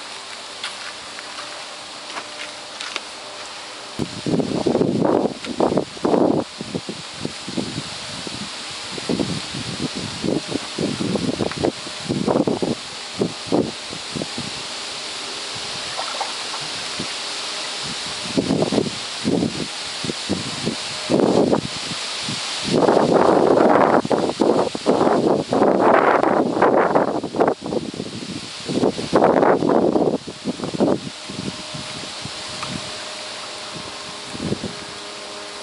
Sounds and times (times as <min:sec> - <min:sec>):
Stream: 0:14.9 - 0:30.9
Gurgling: 0:15.8 - 0:17.2.